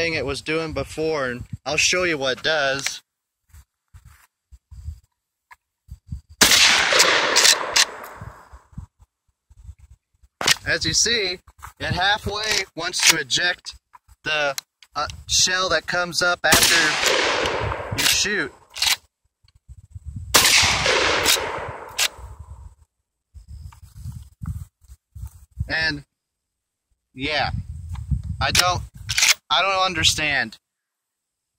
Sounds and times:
Speech: 0.0 - 3.1, 10.6 - 17.0, 18.0 - 18.6, 25.7 - 26.1, 27.2 - 27.6, 28.4 - 28.9, 29.5 - 30.6
Outside, rural or natural: 0.0 - 31.5.

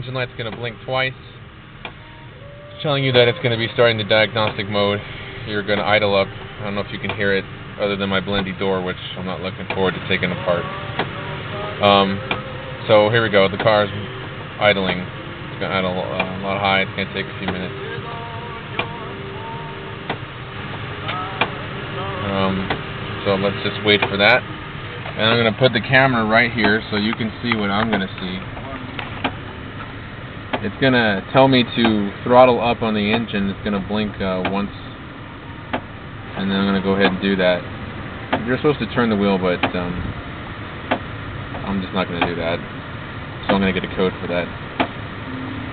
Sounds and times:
Speech: 0.0 - 1.3, 2.8 - 10.7, 12.8 - 14.0, 14.6 - 17.8, 22.2 - 24.4, 25.1 - 28.9, 30.6 - 34.9, 36.4 - 37.6, 38.4 - 40.0, 41.6 - 42.6, 43.4 - 44.5
Car: 0.0 - 45.7
Music: 17.7 - 23.1.

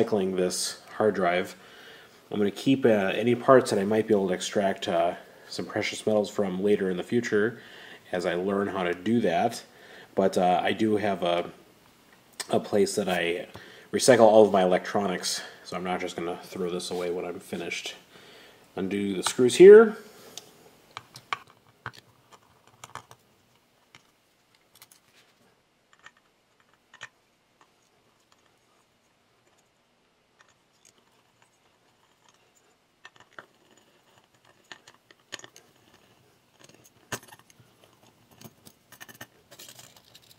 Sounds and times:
Inside, small room: 0.0 - 40.3.

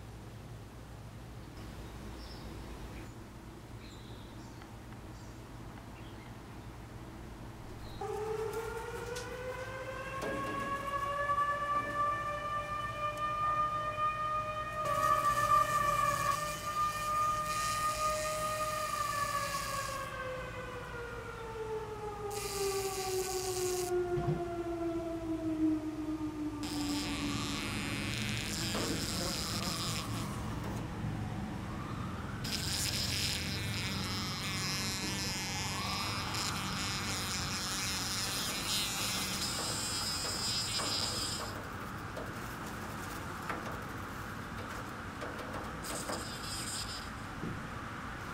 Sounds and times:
Bee, wasp, etc.: 14.8 - 20.1, 22.3 - 24.0, 26.6 - 30.6, 32.4 - 41.6, 45.8 - 47.2
Fly, housefly: 14.8 - 20.1, 22.3 - 24.0, 26.6 - 30.8, 32.4 - 41.7, 45.8 - 47.2.

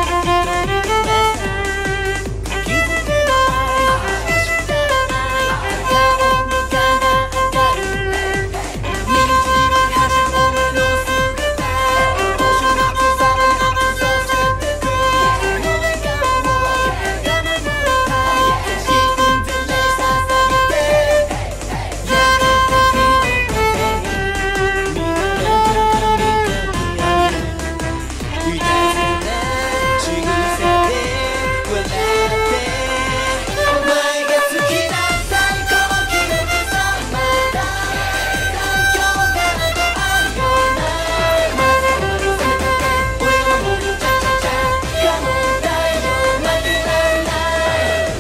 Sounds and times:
Violin, fiddle: 0.0 - 48.2.

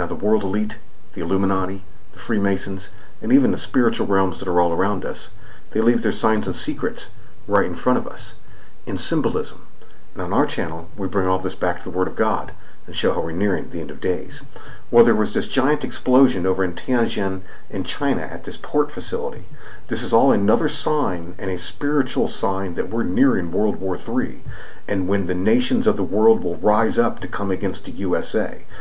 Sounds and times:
Speech: 0.0 - 28.8.

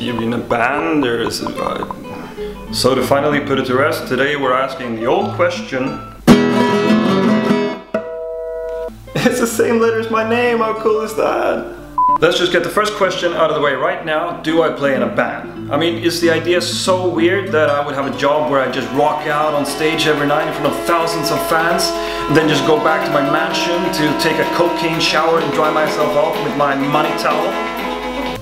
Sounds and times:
Speech: 0.0 - 2.1, 2.7 - 6.0, 9.2 - 27.6
Acoustic guitar: 0.0 - 28.4
Strum: 15.7 - 28.3.

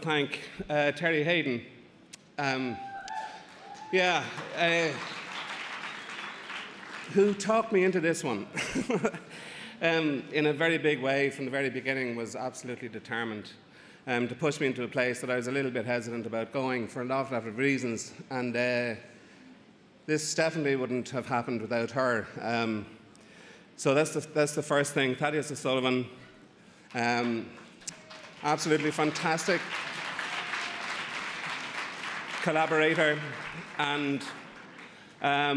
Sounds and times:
Speech: 0.0 - 1.7, 7.1 - 8.6, 9.8 - 19.0, 20.1 - 22.9, 23.8 - 26.2, 27.0 - 27.6, 28.4 - 29.7, 32.4 - 34.3, 35.2 - 35.5.

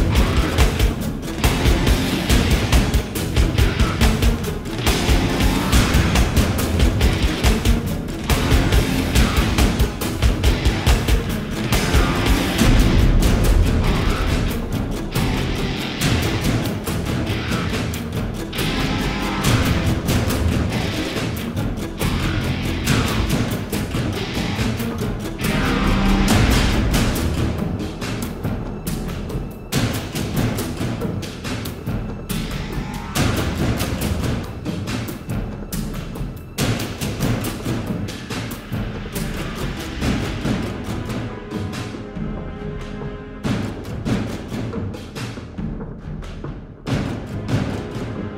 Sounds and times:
Timpani: 0.0 - 48.3.

